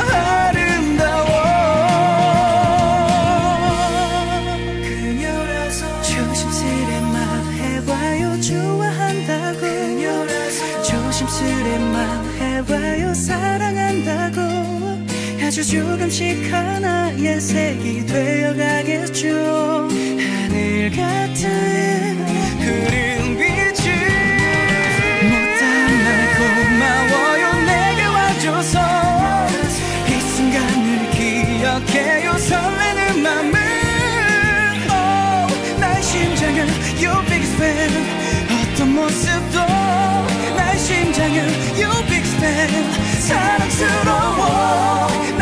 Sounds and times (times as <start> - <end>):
Music: 0.0 - 45.4.